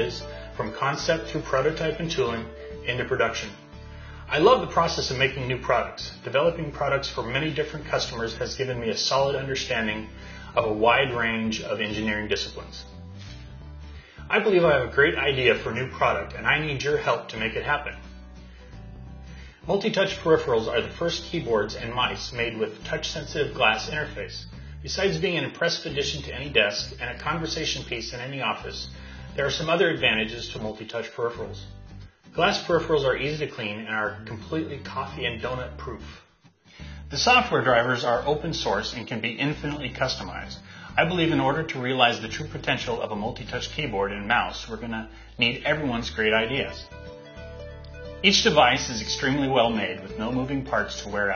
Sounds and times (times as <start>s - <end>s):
Speech: 0.0s - 3.6s, 4.3s - 13.0s, 14.3s - 18.0s, 19.7s - 31.7s, 32.4s - 36.2s, 37.1s - 46.9s, 48.2s - 51.3s
Music: 0.0s - 51.3s.